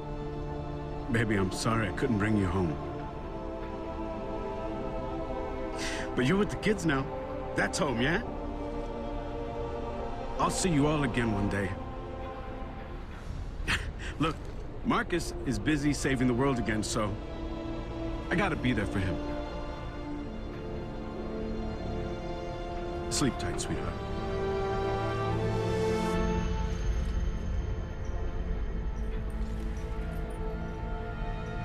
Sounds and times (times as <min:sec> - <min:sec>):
Music: 0:00.0 - 0:31.6
Speech: 0:06.2 - 0:08.2, 0:14.2 - 0:17.2, 0:18.3 - 0:19.2, 0:23.1 - 0:24.0.